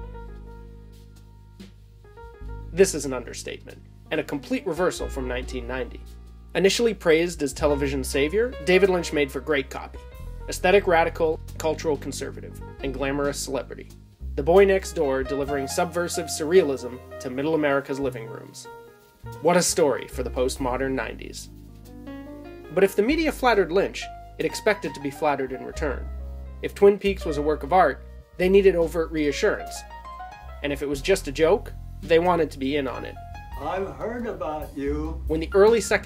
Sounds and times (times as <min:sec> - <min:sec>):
Music: 0:00.0 - 0:36.0
Speech: 0:02.8 - 0:06.0, 0:06.6 - 0:18.7, 0:19.4 - 0:21.5, 0:22.7 - 0:29.8, 0:30.6 - 0:36.0.